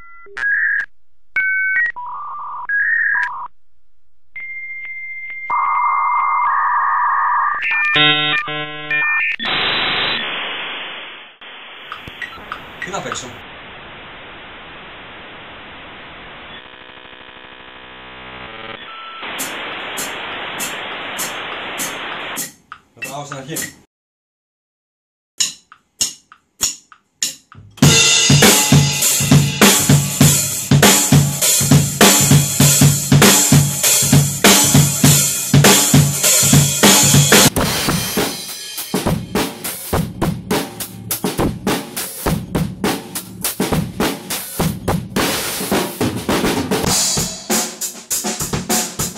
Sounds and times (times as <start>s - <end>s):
Music: 6.4s - 9.4s, 25.4s - 49.1s
Speech: 12.8s - 13.4s, 23.0s - 23.8s.